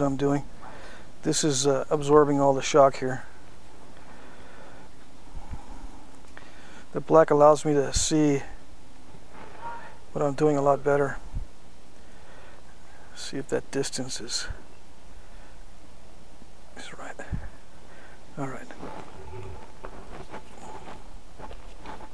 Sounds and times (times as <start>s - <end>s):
Speech: 0.0s - 0.5s, 1.2s - 3.3s, 7.0s - 8.6s, 10.2s - 11.2s, 13.2s - 14.6s, 16.8s - 17.5s, 18.4s - 19.4s.